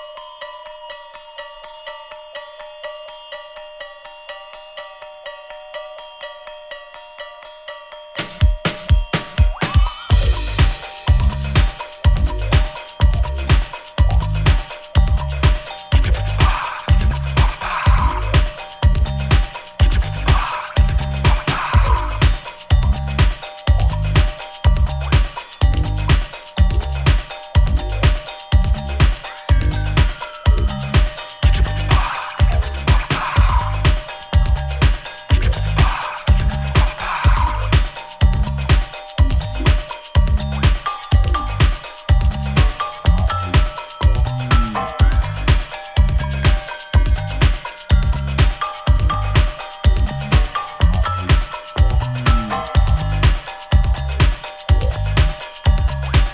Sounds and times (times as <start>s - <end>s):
Music: 0.0s - 56.3s.